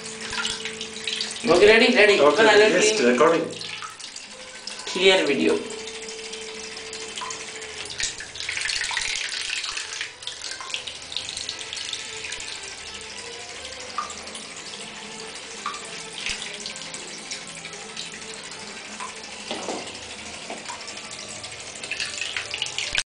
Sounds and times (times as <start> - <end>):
Music: 0.0 - 23.0.